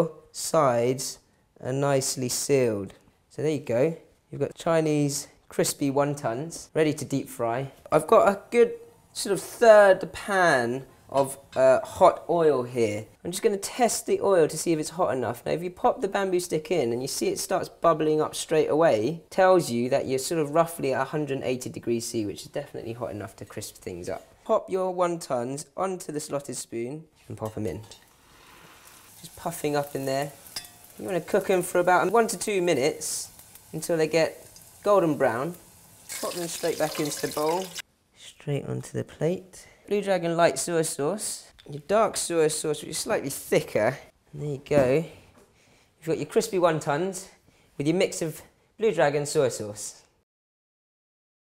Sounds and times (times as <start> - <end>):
Sizzle: 27.4 - 37.9
Frying (food): 27.5 - 37.9.